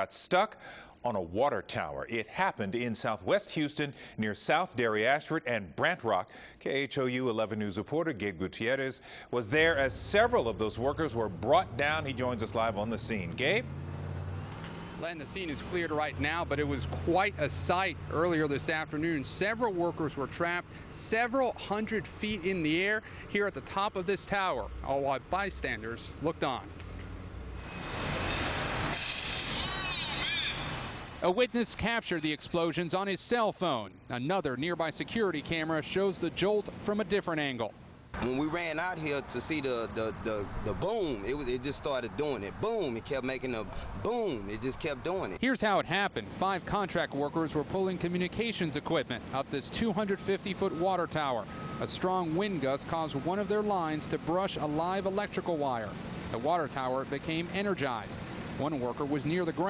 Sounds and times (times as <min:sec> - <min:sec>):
Speech: 0:00.0 - 0:13.6, 0:15.0 - 0:26.7, 0:31.2 - 0:59.6.